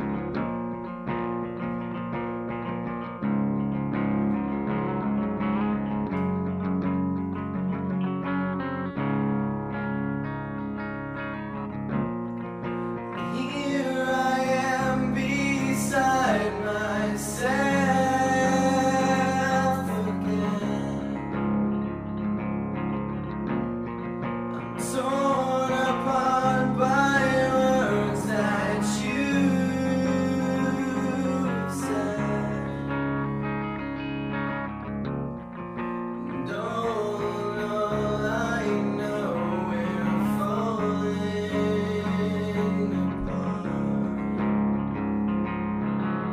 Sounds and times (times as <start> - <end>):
Music: 0.0 - 46.3.